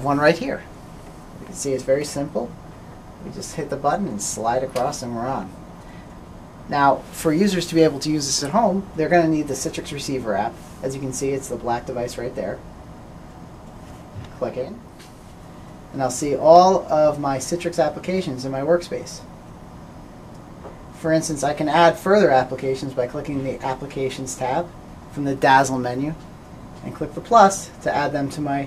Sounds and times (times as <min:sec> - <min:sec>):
Speech: 0:00.0 - 0:00.7, 0:01.4 - 0:02.6, 0:03.2 - 0:05.6, 0:06.7 - 0:12.6, 0:14.2 - 0:14.9, 0:15.9 - 0:19.3, 0:21.0 - 0:28.6.